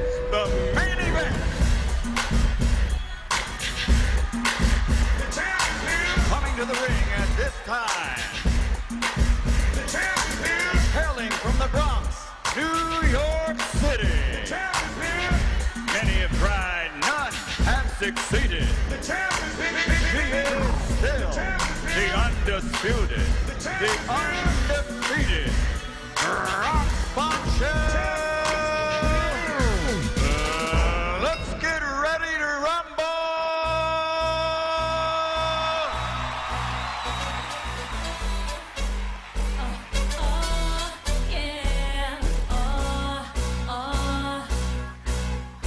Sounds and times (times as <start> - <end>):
Music: 0.0 - 45.6.